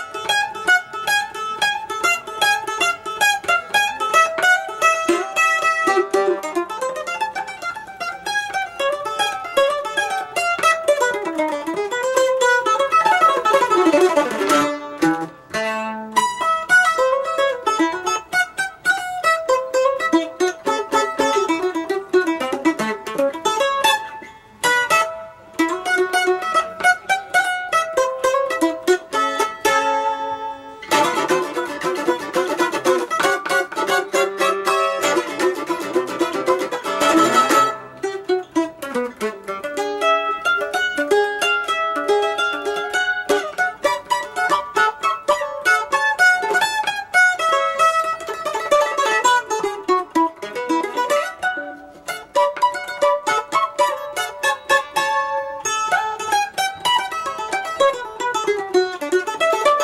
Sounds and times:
Mandolin: 0:00.0 - 0:59.8.

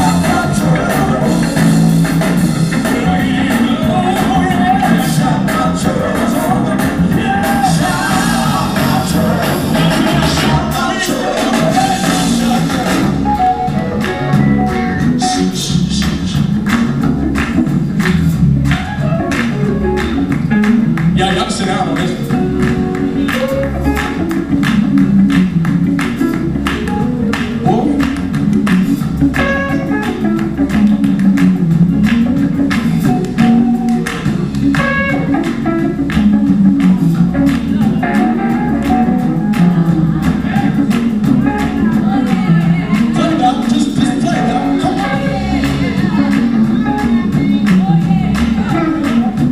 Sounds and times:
Music: 0:00.0 - 0:49.5
Speech: 0:21.2 - 0:22.3, 0:27.6 - 0:28.1.

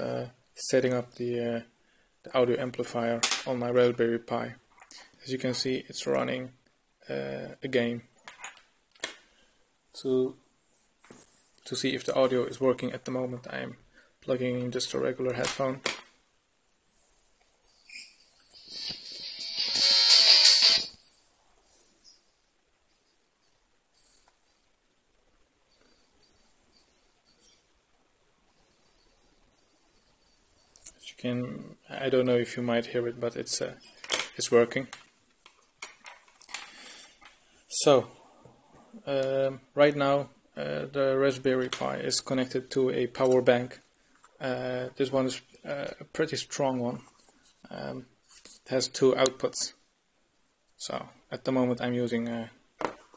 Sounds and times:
Speech: 0:00.0 - 0:01.7, 0:02.3 - 0:04.6, 0:05.2 - 0:08.1, 0:10.0 - 0:10.4, 0:11.6 - 0:15.8, 0:30.9 - 0:33.8, 0:34.4 - 0:35.0, 0:37.7 - 0:38.2, 0:39.0 - 0:43.8, 0:44.4 - 0:47.1, 0:47.7 - 0:48.1, 0:48.7 - 0:49.8, 0:50.8 - 0:52.6
Music: 0:18.6 - 0:21.0.

